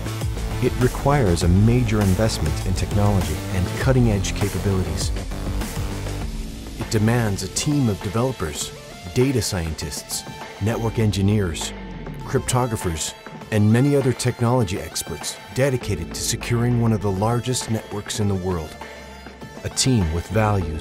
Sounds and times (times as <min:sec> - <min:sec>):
Music: 0:00.0 - 0:20.8
Speech: 0:00.6 - 0:05.2, 0:06.9 - 0:18.8, 0:19.6 - 0:20.8.